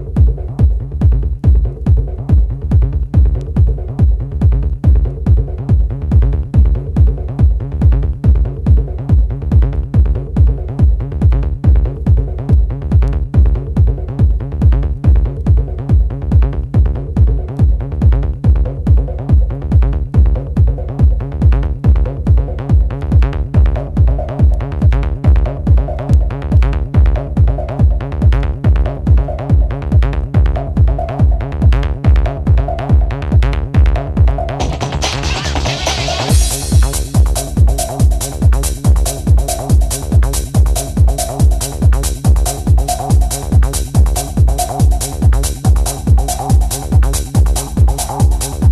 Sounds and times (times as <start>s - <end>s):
Techno: 0.0s - 48.7s.